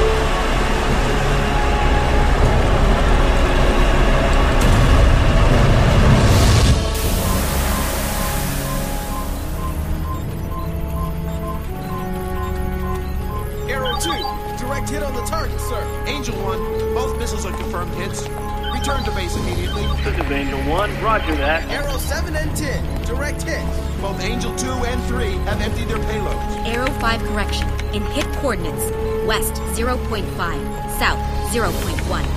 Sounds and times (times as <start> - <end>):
Music: 0.0 - 32.3
Speech: 13.7 - 32.3.